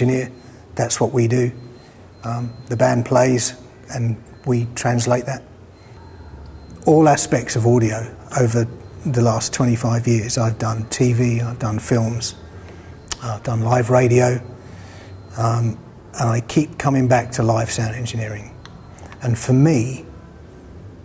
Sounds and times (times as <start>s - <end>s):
Speech: 0.0s - 1.6s, 2.2s - 5.5s, 6.7s - 12.4s, 13.1s - 14.5s, 15.3s - 18.6s, 19.2s - 20.1s.